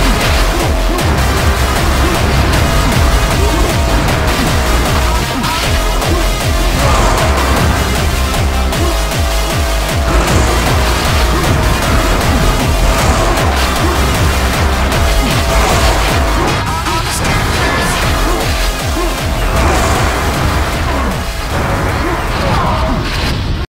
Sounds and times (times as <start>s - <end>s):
Music: 0.0s - 23.7s.